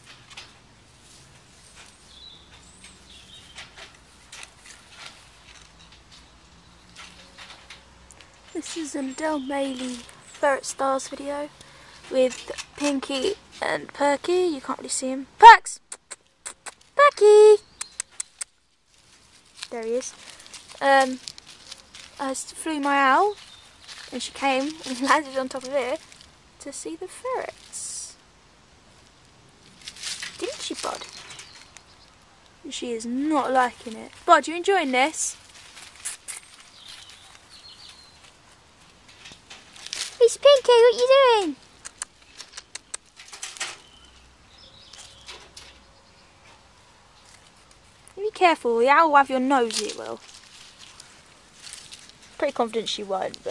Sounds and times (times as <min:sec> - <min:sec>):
Bird: 0:01.6 - 0:04.0, 0:17.5 - 0:18.6, 0:30.4 - 0:32.3, 0:36.0 - 0:38.3, 0:40.9 - 0:47.4
Speech: 0:08.5 - 0:11.5, 0:12.1 - 0:15.8, 0:17.0 - 0:17.7, 0:19.7 - 0:20.2, 0:20.8 - 0:21.2, 0:22.2 - 0:23.4, 0:24.1 - 0:26.0, 0:26.6 - 0:28.2, 0:30.4 - 0:31.2, 0:32.7 - 0:35.4, 0:40.2 - 0:41.6, 0:48.2 - 0:50.2, 0:52.4 - 0:53.5.